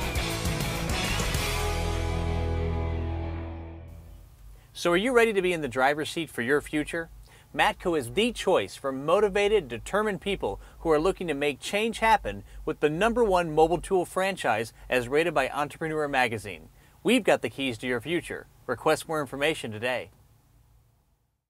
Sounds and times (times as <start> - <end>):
Speech: 4.8 - 20.2.